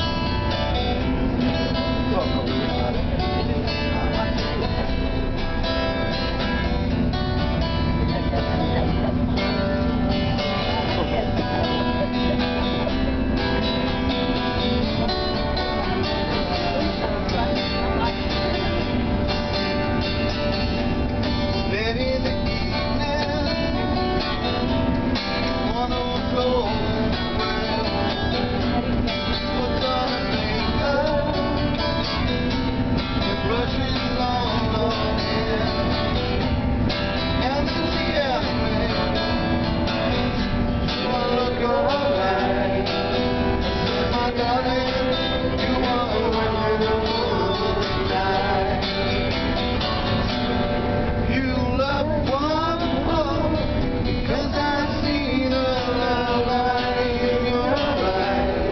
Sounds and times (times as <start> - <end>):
Music: 0.0 - 58.7
Speech: 1.3 - 7.1, 7.8 - 13.6, 14.9 - 19.7
Male singing: 21.7 - 24.0, 25.5 - 32.0, 33.2 - 36.3, 37.4 - 39.6, 40.9 - 49.4, 51.2 - 58.7.